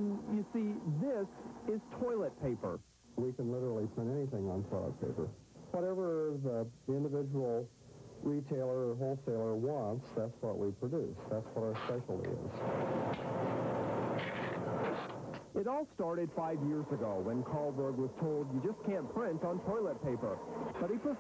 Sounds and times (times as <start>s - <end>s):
Speech: 0.0s - 12.6s, 15.6s - 21.2s.